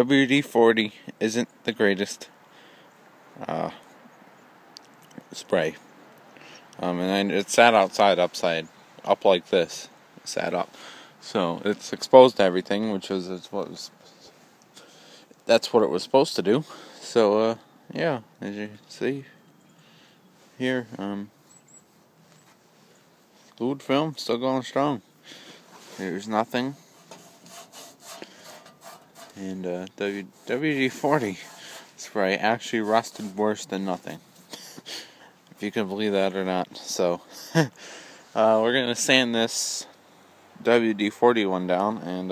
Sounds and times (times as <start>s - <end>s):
Speech: 0.0s - 2.3s, 3.4s - 3.8s, 5.2s - 5.8s, 6.8s - 14.0s, 15.4s - 19.4s, 20.6s - 21.3s, 23.6s - 25.0s, 25.9s - 26.8s, 29.3s - 34.2s, 35.6s - 37.3s, 38.4s - 39.9s, 40.6s - 42.3s.